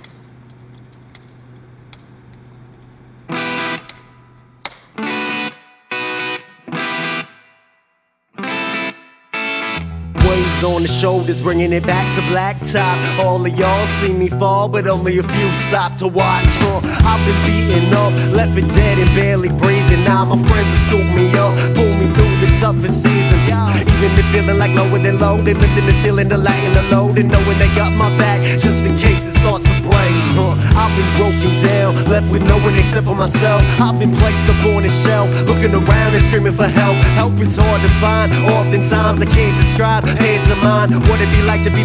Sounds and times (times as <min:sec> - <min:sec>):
Music: 0:03.3 - 0:41.8.